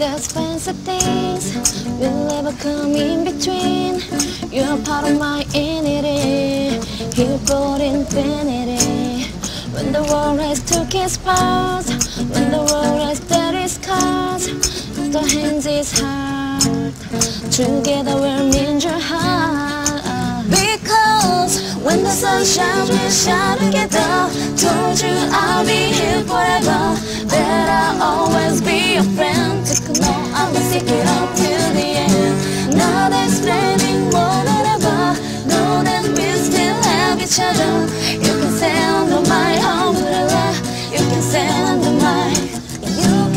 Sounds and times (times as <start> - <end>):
Singing: 0.0 - 43.3.